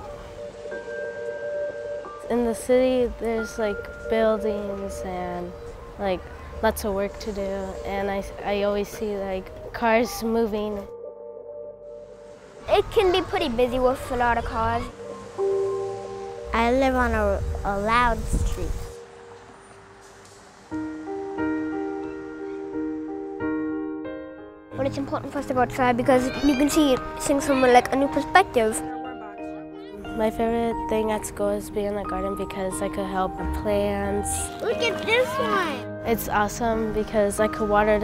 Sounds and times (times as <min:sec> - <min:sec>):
Music: 0:00.0 - 0:38.0.